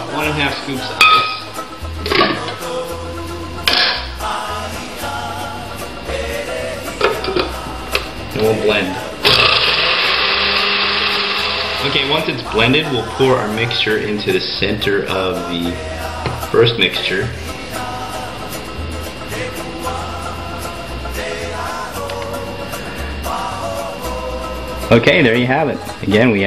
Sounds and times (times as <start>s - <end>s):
Blender: 9.2s - 12.3s.